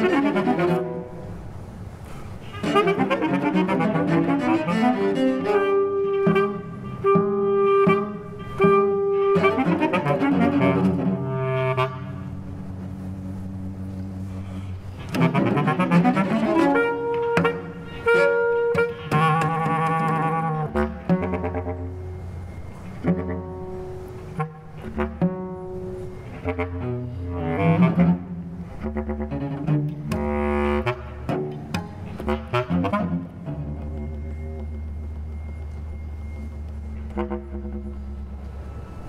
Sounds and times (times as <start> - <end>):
Double bass: 0.0 - 1.3, 2.4 - 39.0
Cello: 0.0 - 39.0
Classical music: 0.0 - 39.0
Jazz: 0.0 - 39.0.